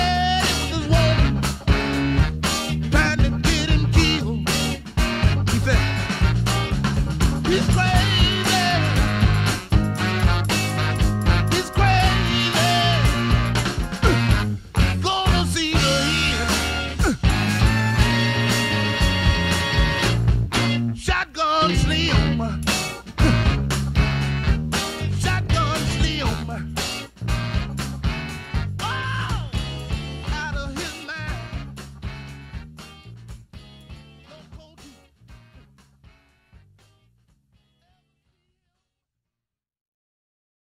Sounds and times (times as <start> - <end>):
Progressive rock: 0.0 - 37.0.